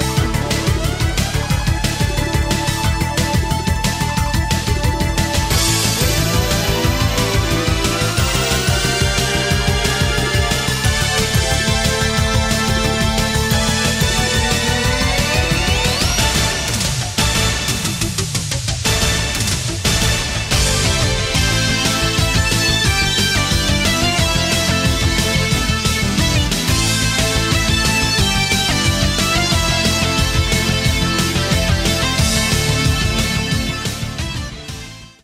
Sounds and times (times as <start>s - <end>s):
Music: 0.0s - 35.2s.